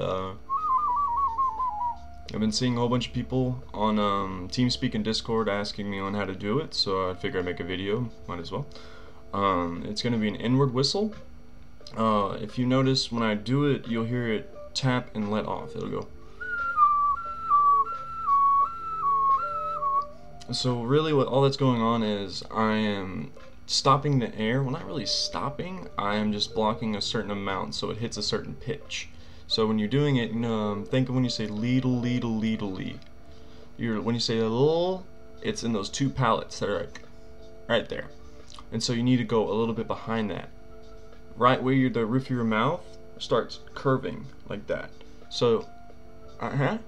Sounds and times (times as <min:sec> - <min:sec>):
Speech: 0:00.0 - 0:00.4, 0:02.3 - 0:08.7, 0:09.4 - 0:11.2, 0:11.9 - 0:16.1, 0:20.4 - 0:33.0, 0:33.8 - 0:37.0, 0:37.7 - 0:38.1, 0:38.7 - 0:40.5, 0:41.4 - 0:45.7, 0:46.4 - 0:46.8
Whistling: 0:00.5 - 0:02.1, 0:16.3 - 0:20.3.